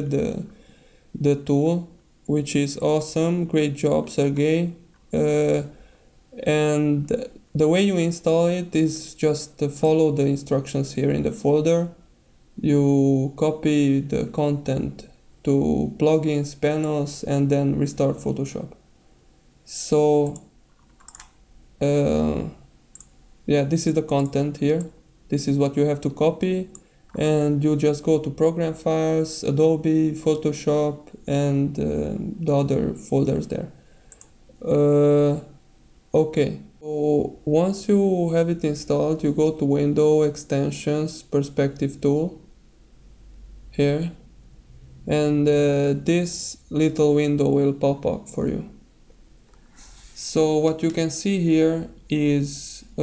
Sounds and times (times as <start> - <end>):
Speech: 0.0 - 0.5, 1.2 - 5.7, 6.4 - 12.0, 12.6 - 18.8, 19.6 - 20.5, 21.8 - 22.7, 23.5 - 33.8, 34.6 - 35.6, 36.2 - 42.5, 43.8 - 44.2, 45.1 - 48.8, 50.2 - 53.0
Computer keyboard: 20.8 - 21.4.